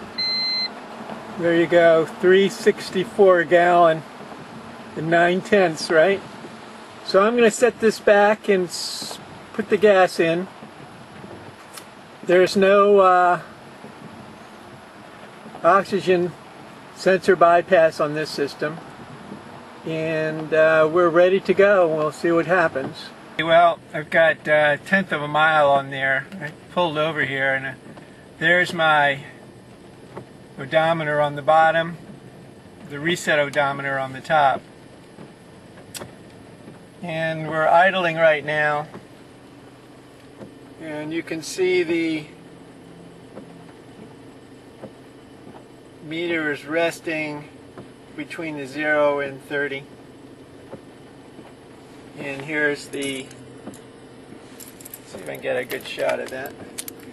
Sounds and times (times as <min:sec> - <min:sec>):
Speech: 0:01.4 - 0:04.0, 0:05.0 - 0:06.2, 0:07.1 - 0:10.5, 0:12.3 - 0:13.5, 0:15.6 - 0:16.4, 0:17.0 - 0:18.8, 0:19.9 - 0:27.8, 0:28.4 - 0:29.3, 0:30.6 - 0:32.0, 0:32.9 - 0:34.6, 0:37.0 - 0:38.9, 0:40.8 - 0:42.4, 0:46.0 - 0:47.5, 0:48.2 - 0:49.9, 0:52.2 - 0:53.3, 0:55.1 - 0:56.6.